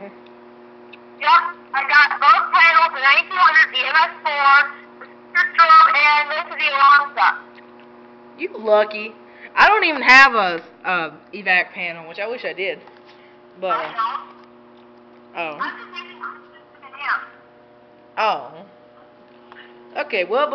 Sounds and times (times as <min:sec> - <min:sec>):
Speech: 0:13.6 - 0:14.3, 0:20.0 - 0:20.5.